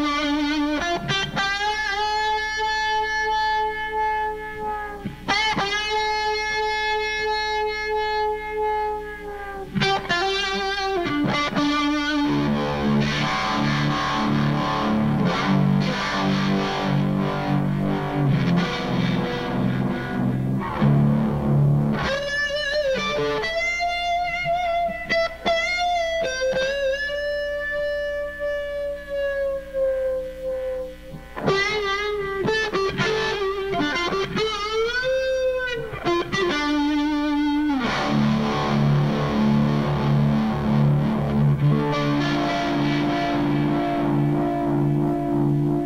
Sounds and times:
Music: 0.0 - 45.8.

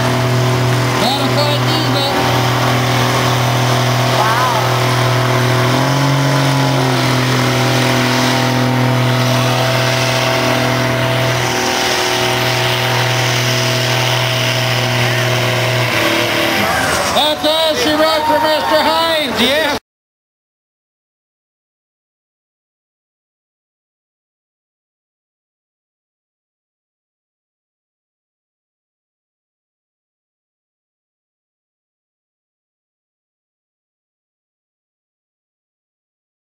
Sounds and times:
Truck: 0.0 - 19.8.

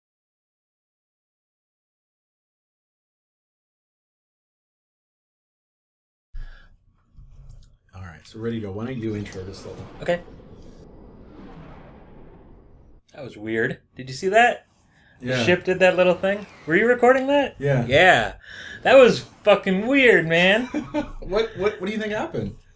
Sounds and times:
Speech: 8.0 - 10.2, 13.2 - 14.6, 15.2 - 22.6.

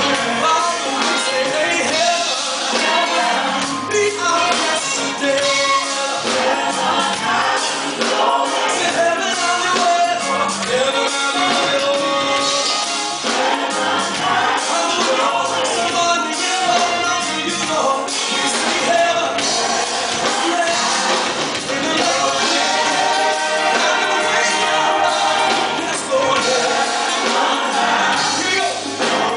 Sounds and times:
Music: 0.0 - 29.3.

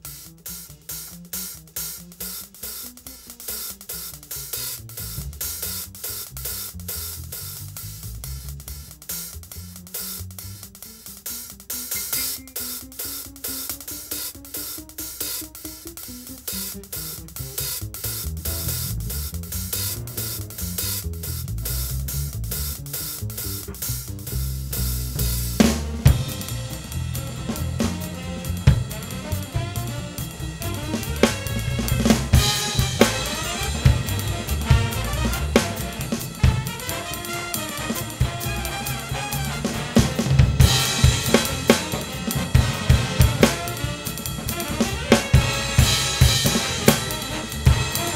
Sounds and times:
Drum kit: 0.0 - 48.1
Bass drum: 3.8 - 11.0, 14.8 - 48.1.

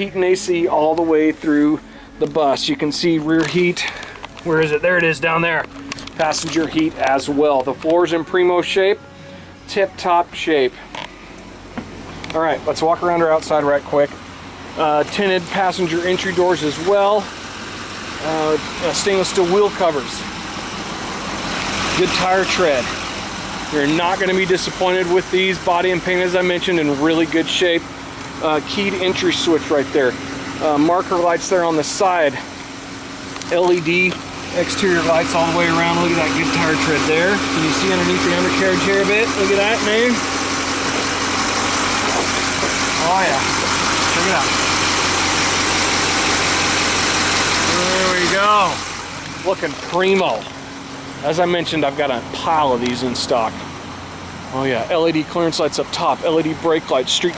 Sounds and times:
Speech: 0.0 - 9.0, 9.7 - 10.8, 12.3 - 14.2, 14.8 - 17.3, 18.2 - 20.3, 21.9 - 23.0, 23.7 - 32.5, 33.4 - 40.2, 43.0 - 44.6, 47.6 - 48.8, 49.4 - 50.6, 51.2 - 53.6, 54.5 - 57.3
Outside, urban or manmade: 0.0 - 57.3.

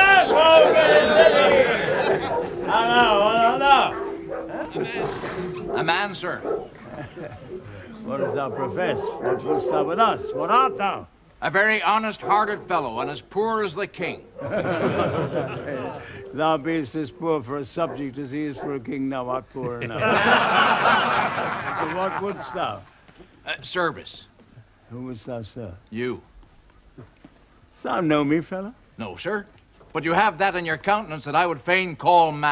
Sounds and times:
Speech: 7.9 - 14.2, 15.5 - 20.1, 21.7 - 22.9, 27.8 - 32.5.

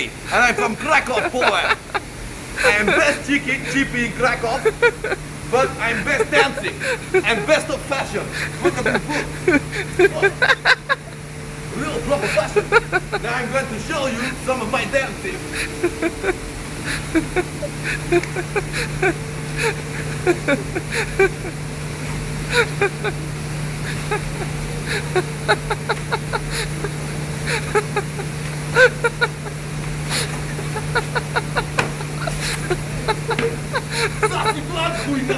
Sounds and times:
Speech: 0.0 - 1.9, 2.6 - 4.9, 5.5 - 9.2, 10.0 - 10.5, 11.7 - 15.4, 34.2 - 35.3.

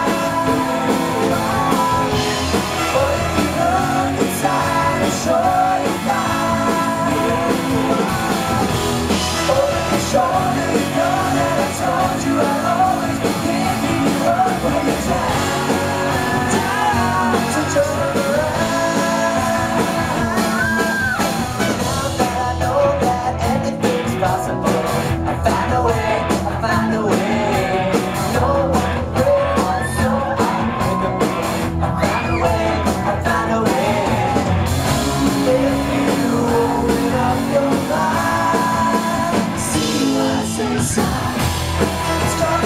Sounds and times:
Music: 0.0 - 42.6.

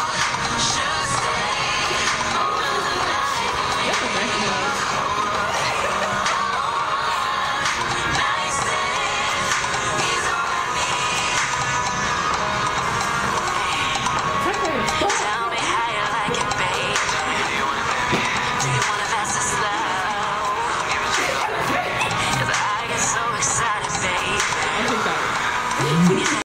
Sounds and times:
Music: 0.0 - 26.4
Speech: 3.8 - 4.8, 14.4 - 15.3, 24.8 - 26.4.

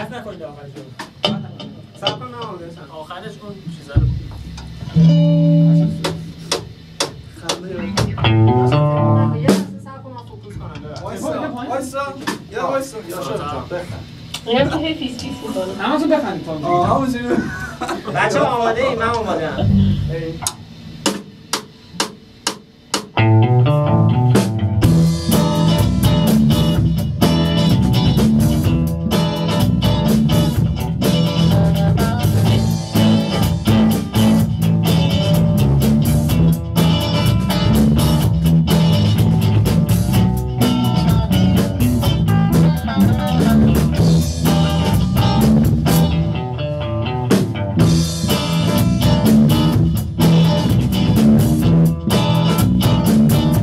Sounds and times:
Music: 4.0 - 10.0, 19.6 - 20.2, 22.4 - 53.6.

